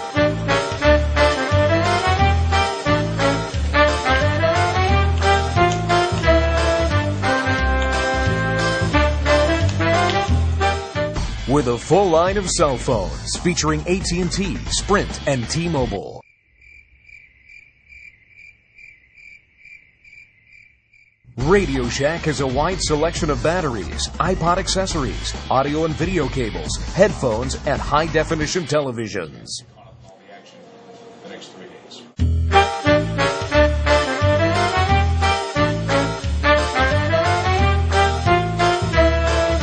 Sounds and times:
Music: 0.0s - 16.2s, 21.4s - 28.9s, 30.8s - 39.6s
Speech: 11.5s - 16.2s, 21.4s - 32.2s.

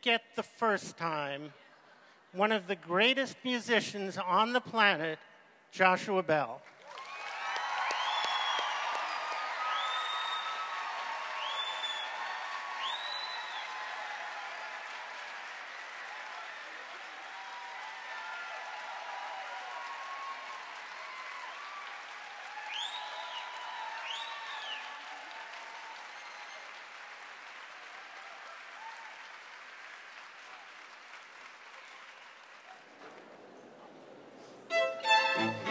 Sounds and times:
Music: 34.7s - 35.7s.

